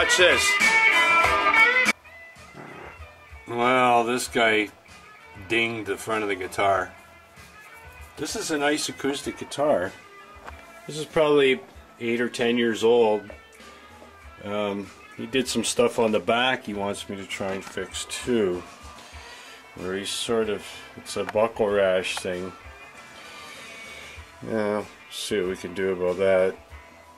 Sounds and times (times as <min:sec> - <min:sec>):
Speech: 0:00.0 - 0:00.5, 0:03.5 - 0:04.8, 0:05.4 - 0:06.9, 0:08.2 - 0:10.0, 0:10.9 - 0:13.4, 0:14.4 - 0:18.7, 0:19.8 - 0:22.6, 0:24.4 - 0:26.6.